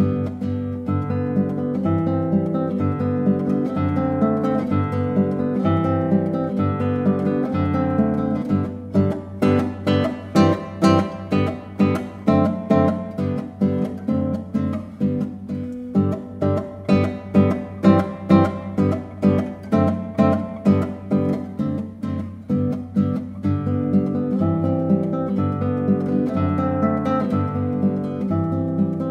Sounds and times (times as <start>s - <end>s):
Acoustic guitar: 0.0s - 29.1s
Strum: 0.0s - 29.1s.